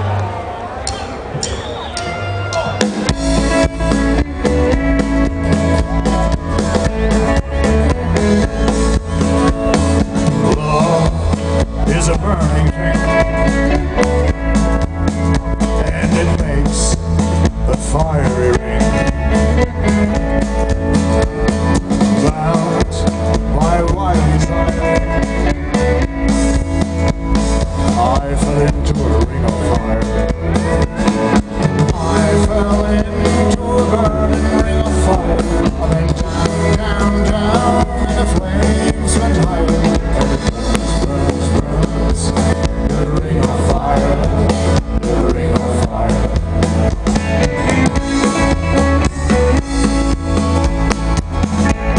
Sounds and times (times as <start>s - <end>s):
Music: 0.9s - 51.9s.